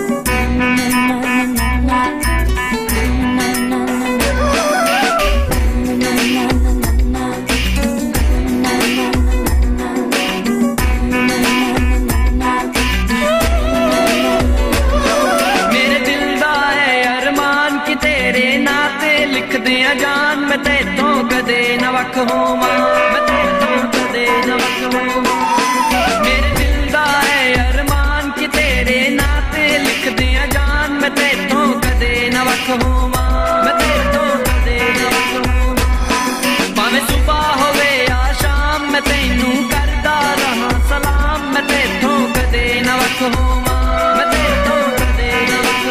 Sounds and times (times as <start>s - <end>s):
Music: 0.0s - 45.9s.